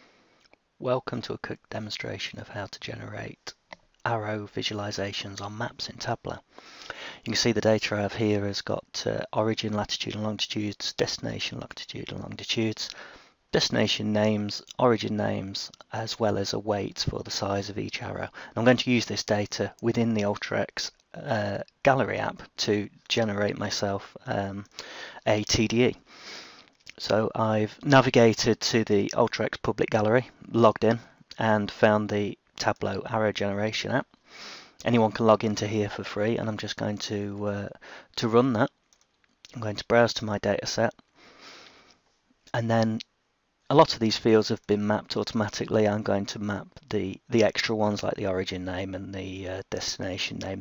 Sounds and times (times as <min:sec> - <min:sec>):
Speech: 0:00.8 - 0:06.5, 0:07.2 - 0:13.0, 0:13.6 - 0:26.0, 0:26.9 - 0:34.0, 0:34.8 - 0:38.7, 0:39.5 - 0:41.0, 0:42.5 - 0:43.0, 0:43.7 - 0:50.6.